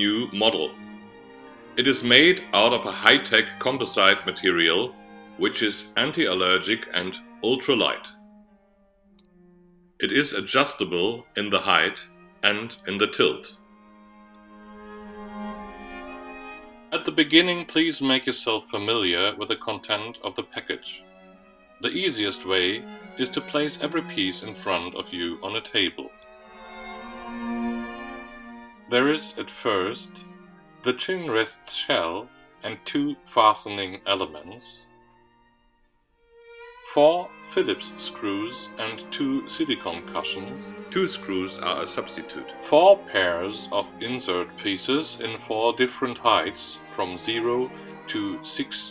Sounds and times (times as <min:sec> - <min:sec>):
Speech: 0:00.0 - 0:00.7, 0:01.8 - 0:08.1, 0:10.0 - 0:13.5, 0:17.0 - 0:21.0, 0:21.8 - 0:26.1, 0:28.9 - 0:30.2, 0:30.9 - 0:34.8, 0:36.9 - 0:48.9
Violin, fiddle: 0:00.0 - 0:08.1, 0:10.0 - 0:35.0, 0:36.4 - 0:48.9.